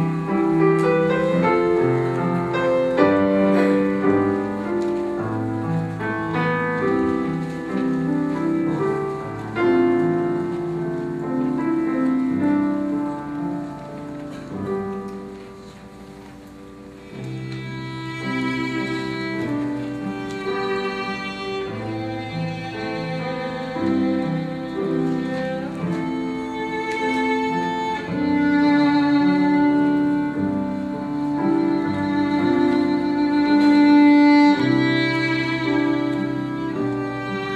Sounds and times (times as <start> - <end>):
Violin, fiddle: 0.0 - 9.8, 17.1 - 37.5.